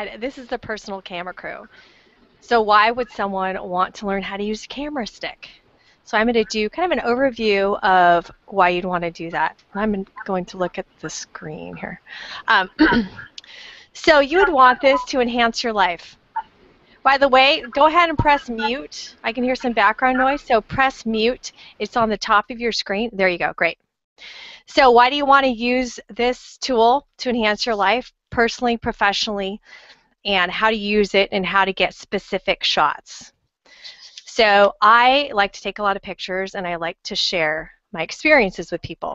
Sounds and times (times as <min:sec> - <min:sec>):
Speech: 0:00.0 - 0:01.8, 0:02.4 - 0:16.1, 0:17.1 - 0:23.8, 0:24.6 - 0:29.7, 0:30.3 - 0:39.1.